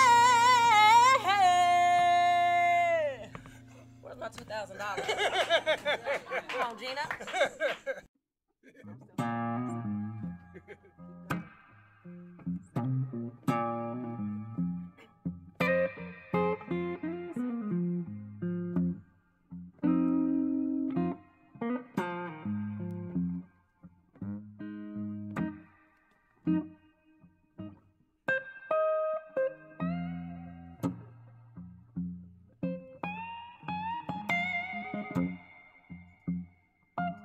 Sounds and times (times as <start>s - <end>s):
Music: 0.0s - 5.0s, 9.0s - 37.2s.